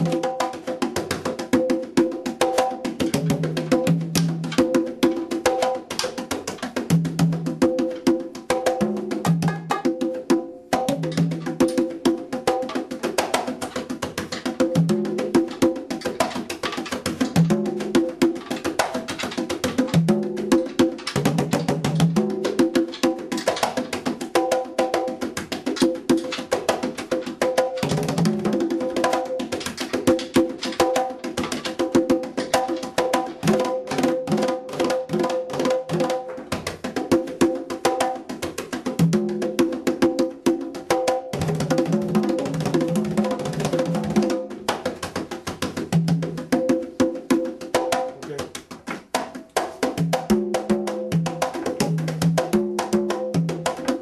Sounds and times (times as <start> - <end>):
Percussion: 0.0 - 54.0.